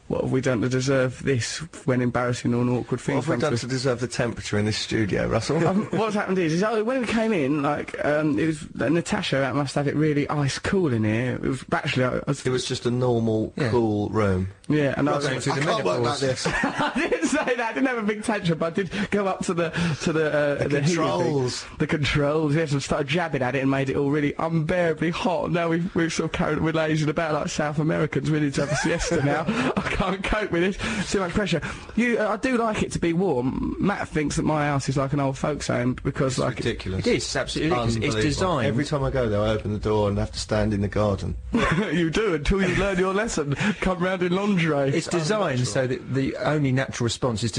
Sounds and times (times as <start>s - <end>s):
Speech: 0.0s - 47.5s.